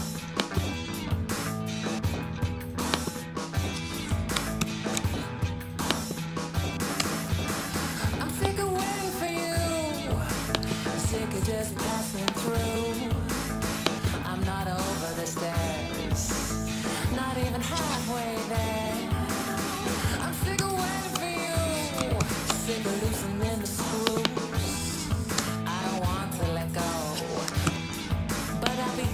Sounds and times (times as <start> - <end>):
Music: 0.0 - 29.1.